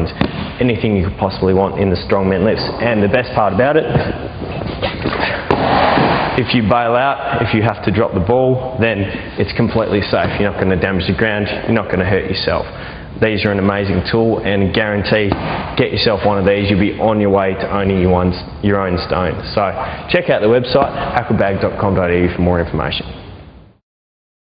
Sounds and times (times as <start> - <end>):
Speech: 0.0 - 4.1, 6.4 - 23.2.